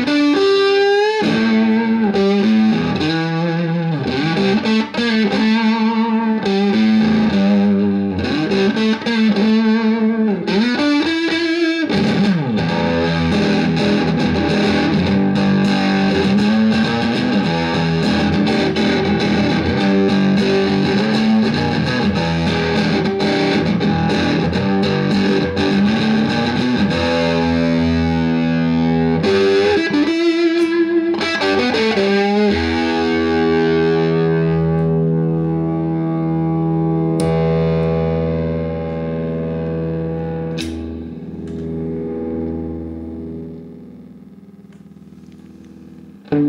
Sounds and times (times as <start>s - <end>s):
Effects unit: 0.0s - 46.4s
Guitar: 0.0s - 46.4s.